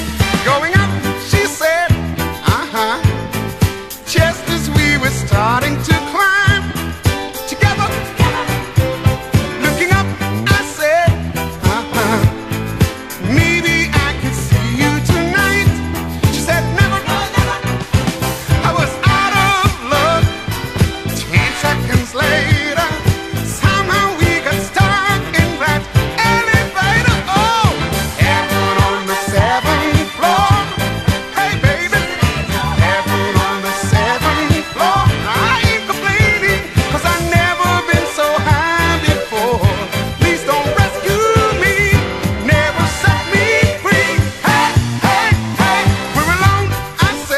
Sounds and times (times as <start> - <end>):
Music: 0.0 - 47.3.